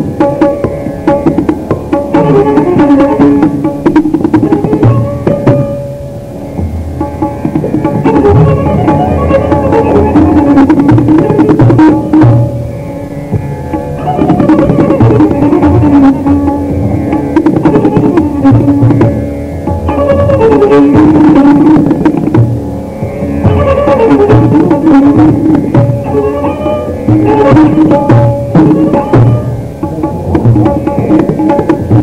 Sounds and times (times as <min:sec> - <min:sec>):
Tabla: 0:00.0 - 0:32.0.